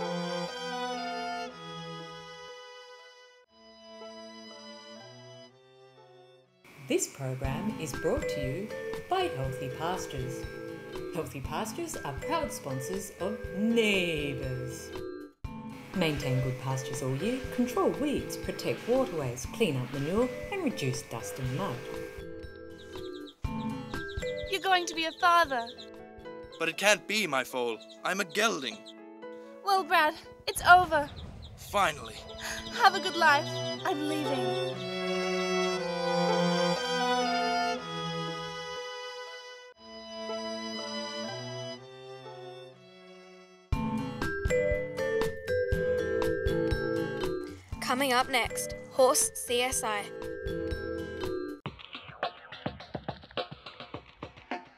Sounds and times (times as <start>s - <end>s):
Music: 0.0s - 54.7s
Speech: 6.9s - 10.4s, 11.2s - 14.8s, 16.0s - 21.9s, 26.6s - 28.8s, 29.7s - 32.2s, 32.8s - 34.6s, 47.8s - 50.1s.